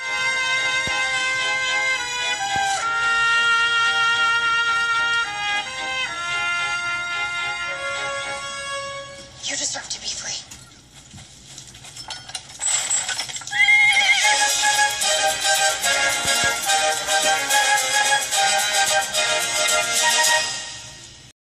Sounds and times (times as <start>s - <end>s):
Music: 0.0s - 9.7s, 14.2s - 21.3s
Clip-clop: 10.6s - 14.5s
Neigh, whinny: 13.5s - 14.4s.